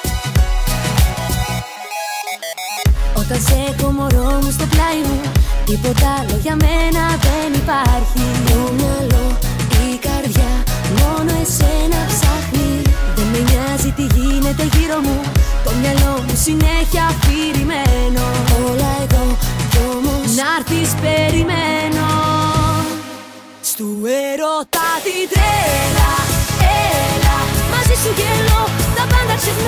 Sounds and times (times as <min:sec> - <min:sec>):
Happy music: 0:00.0 - 0:29.6
Pop music: 0:00.0 - 0:29.6.